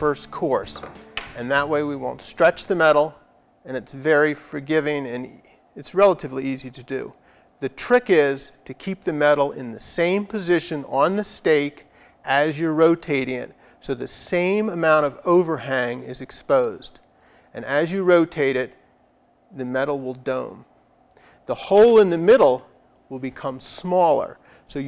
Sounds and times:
Speech: 0.0 - 0.8, 1.4 - 17.0, 17.6 - 18.8, 19.6 - 20.7, 21.5 - 24.8.

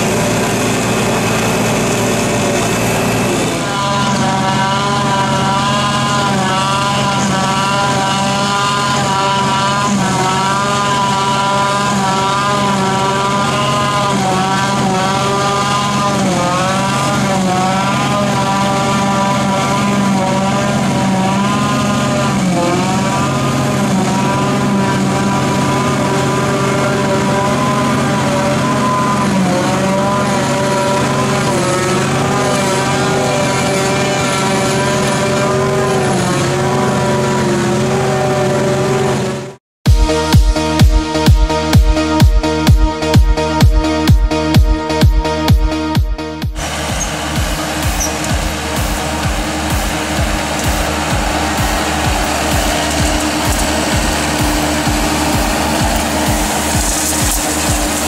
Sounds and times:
Vehicle: 0.0 - 39.6, 46.6 - 58.0.

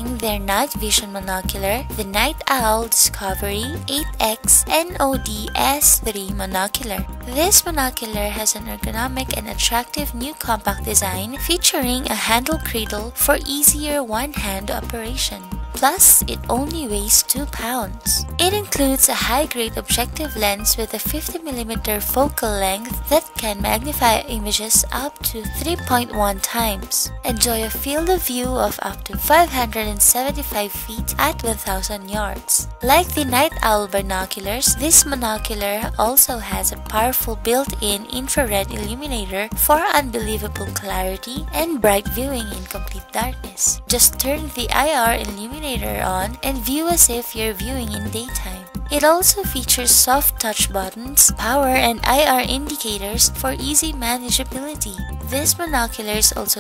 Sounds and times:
Music: 0.0 - 56.6
Speech: 0.0 - 56.6.

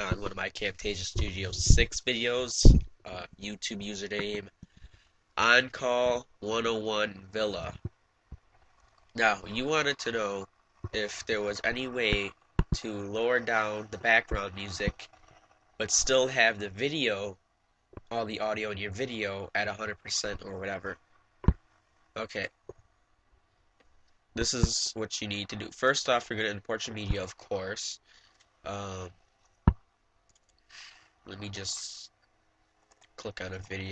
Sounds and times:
Speech: 0.0 - 4.5, 5.4 - 7.8, 9.2 - 15.1, 15.8 - 17.4, 18.1 - 21.0, 22.2 - 22.6, 24.4 - 28.0, 28.7 - 29.2, 31.3 - 32.2, 33.2 - 33.9.

